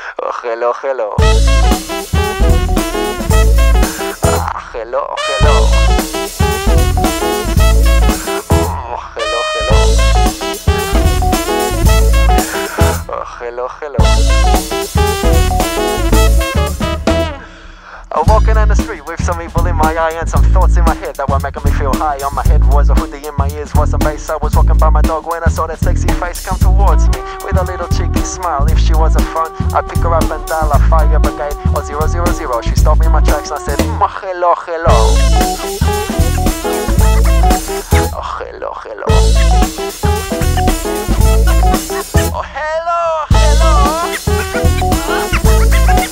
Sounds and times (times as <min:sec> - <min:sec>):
Music: 0:01.2 - 0:13.3, 0:14.0 - 0:34.2, 0:34.8 - 0:46.1.